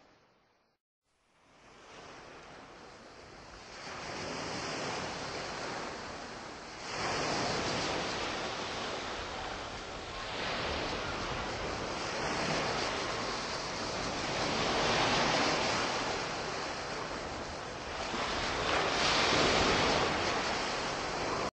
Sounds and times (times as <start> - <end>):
Waves, surf: 1.2 - 21.5.